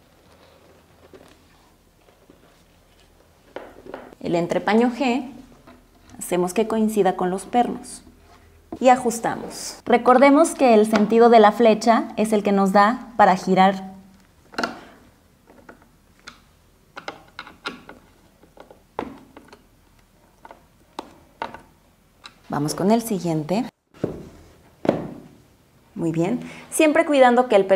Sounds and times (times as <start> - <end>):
Speech: 4.2 - 5.4, 6.2 - 8.1, 8.8 - 14.0, 22.5 - 23.8, 26.0 - 27.7.